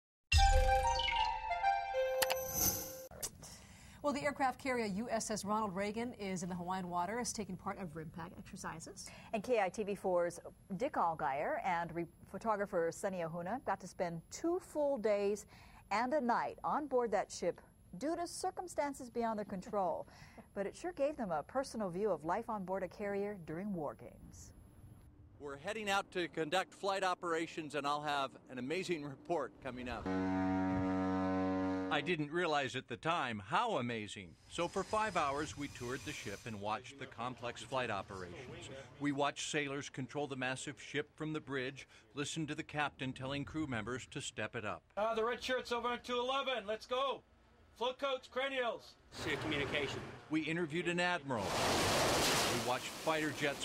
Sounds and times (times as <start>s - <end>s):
Music: 0.3s - 2.4s.